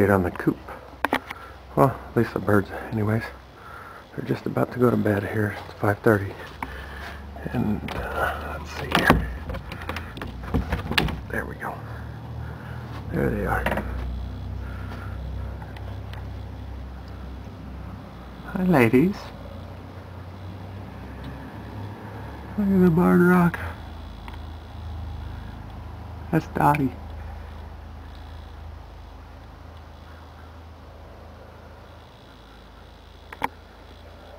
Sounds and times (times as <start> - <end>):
Speech: 0.0 - 0.7, 7.4 - 9.3, 11.3 - 11.9, 13.1 - 13.9, 18.5 - 19.4, 22.6 - 23.8, 26.3 - 27.0.